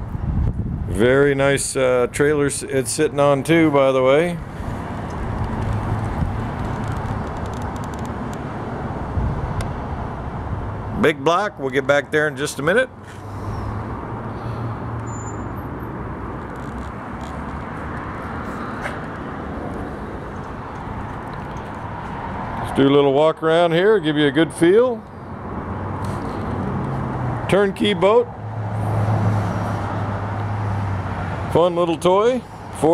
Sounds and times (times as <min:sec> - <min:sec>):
Speech: 0:00.9 - 0:04.4, 0:11.0 - 0:13.0, 0:22.7 - 0:25.0, 0:27.5 - 0:28.3, 0:31.5 - 0:32.9.